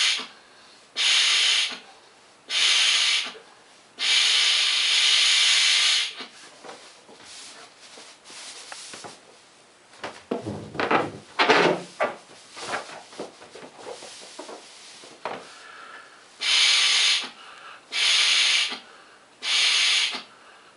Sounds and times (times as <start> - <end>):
Inside, small room: 0.0 - 20.7.